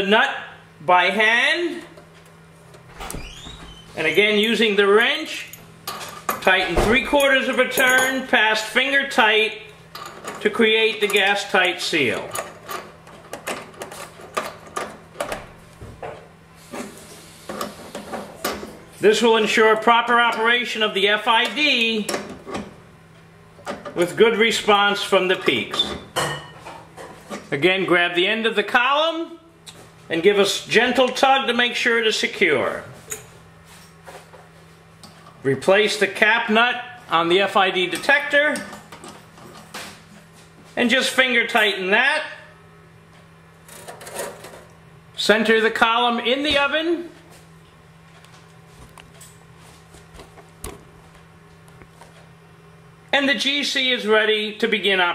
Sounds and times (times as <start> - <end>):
Speech: 0.0 - 2.0, 4.0 - 5.6, 6.4 - 9.7, 10.4 - 12.4, 19.0 - 22.2, 24.0 - 26.0, 27.5 - 29.5, 30.1 - 33.0, 35.4 - 38.8, 40.8 - 42.6, 45.2 - 47.2, 53.1 - 55.1.